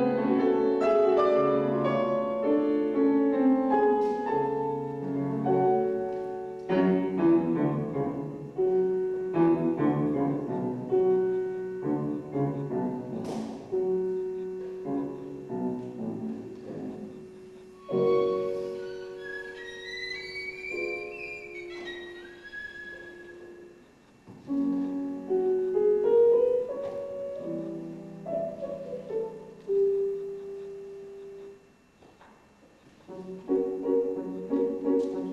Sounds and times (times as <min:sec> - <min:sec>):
Inside, large room or hall: 0:00.0 - 0:35.3
Violin, fiddle: 0:17.8 - 0:23.5.